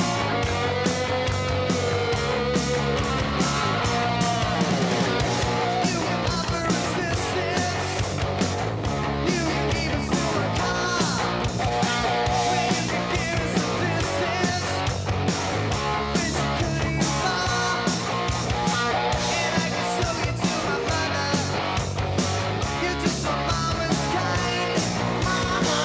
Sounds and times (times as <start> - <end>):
Music: 0.0 - 25.8.